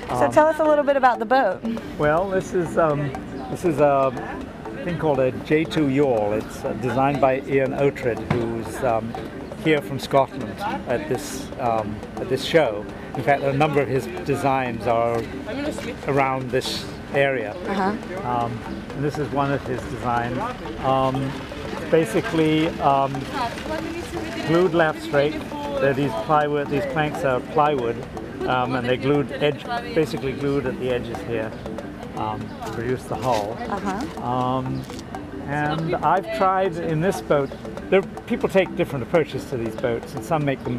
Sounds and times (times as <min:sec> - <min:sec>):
Music: 0:00.0 - 0:40.7.